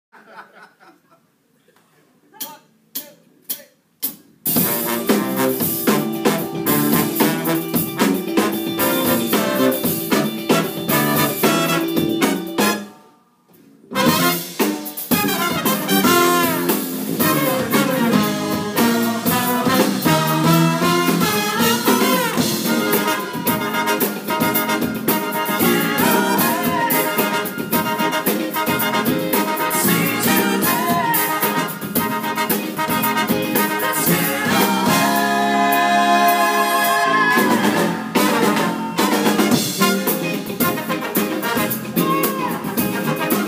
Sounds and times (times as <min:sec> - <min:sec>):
Laughter: 0:00.1 - 0:01.4
Speech: 0:01.6 - 0:03.8
Music: 0:04.0 - 0:43.4.